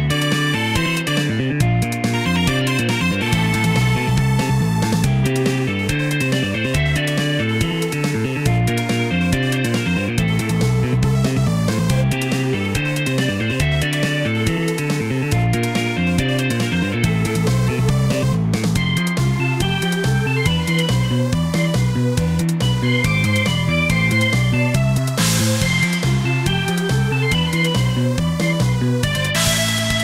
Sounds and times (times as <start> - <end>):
Music: 0.0 - 30.0.